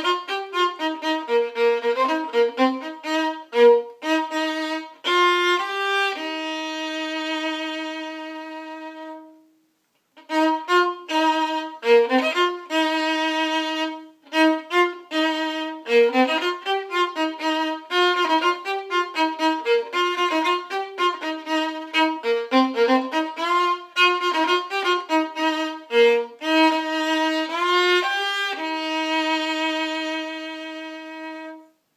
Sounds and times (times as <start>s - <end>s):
Violin, fiddle: 0.0s - 9.5s, 10.2s - 31.8s.